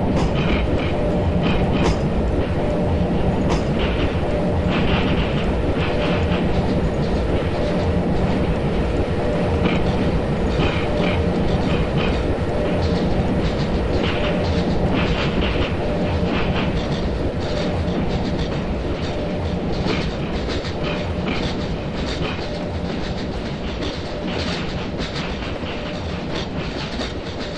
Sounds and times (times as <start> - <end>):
Railroad car, train wagon: 0.0 - 27.5
Train: 0.0 - 27.5.